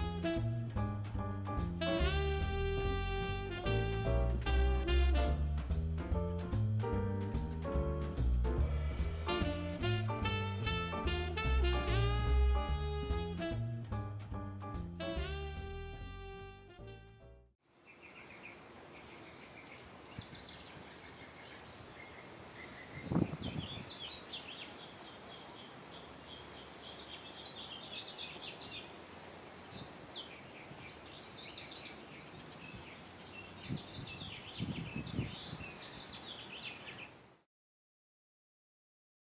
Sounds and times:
Music: 0.0s - 17.5s.

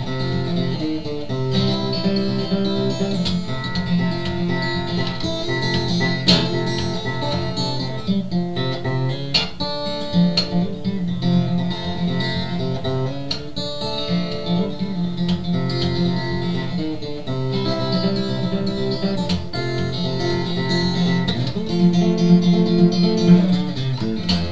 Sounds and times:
Acoustic guitar: 0.0s - 24.5s.

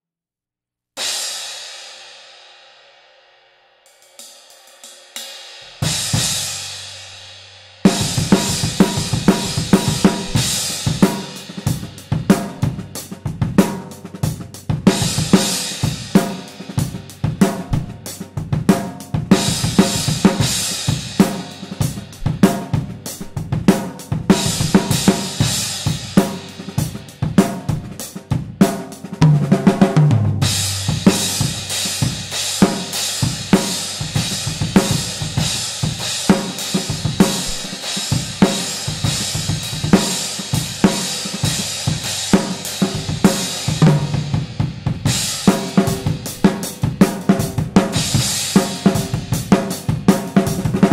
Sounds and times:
Drum kit: 3.9s - 50.9s
Rimshot: 7.9s - 12.7s, 17.4s - 28.0s, 36.3s - 38.8s
Bass drum: 7.9s - 50.9s.

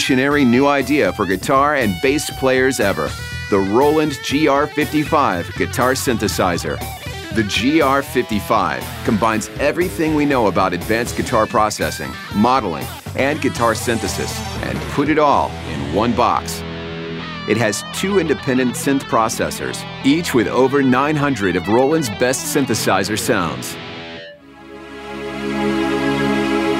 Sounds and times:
Speech: 0.0s - 16.7s, 17.5s - 23.8s
Electric guitar: 0.0s - 26.7s.

